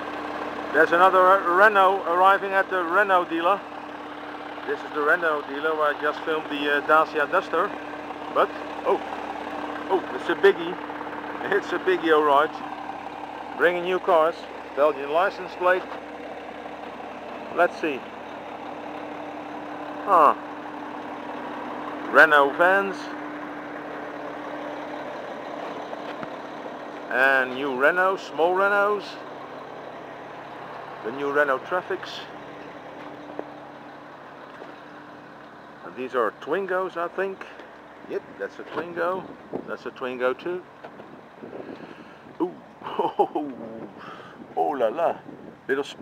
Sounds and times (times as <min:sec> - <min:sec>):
Truck: 0:00.0 - 0:46.0
Speech: 0:00.7 - 0:03.6, 0:04.7 - 0:07.8, 0:08.4 - 0:09.0, 0:09.9 - 0:10.8, 0:11.4 - 0:12.6, 0:13.6 - 0:15.9, 0:17.5 - 0:18.0, 0:20.0 - 0:20.4, 0:22.1 - 0:23.1, 0:27.1 - 0:29.2, 0:31.0 - 0:32.3, 0:35.8 - 0:40.6, 0:44.6 - 0:46.0.